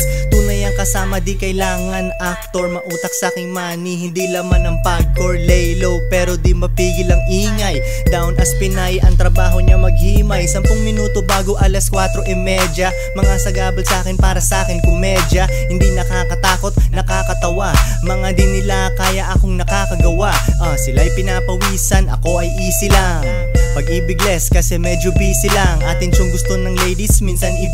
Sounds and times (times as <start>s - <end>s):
Music: 0.0s - 27.7s.